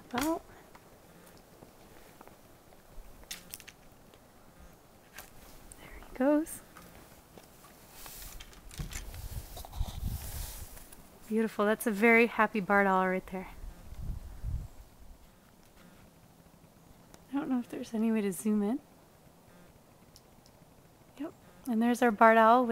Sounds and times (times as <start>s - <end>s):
Speech: 0.1s - 0.4s, 5.8s - 6.6s, 11.3s - 13.6s, 17.3s - 18.8s, 21.2s - 22.7s.